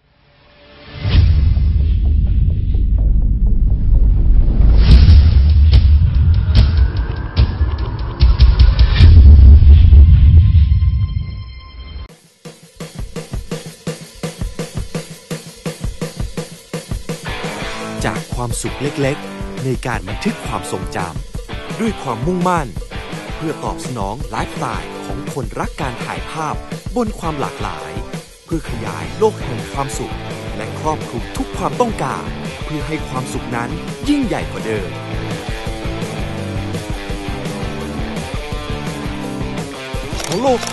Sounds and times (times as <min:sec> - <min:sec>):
Music: 0:00.0 - 0:40.7
Speech: 0:18.0 - 0:35.0, 0:40.2 - 0:40.7.